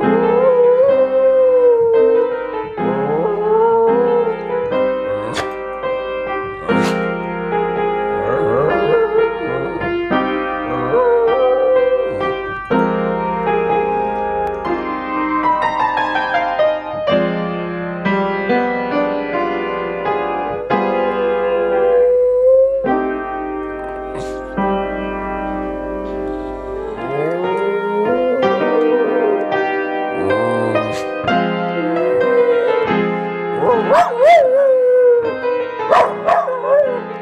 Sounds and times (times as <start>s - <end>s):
Music: 0.0s - 37.2s.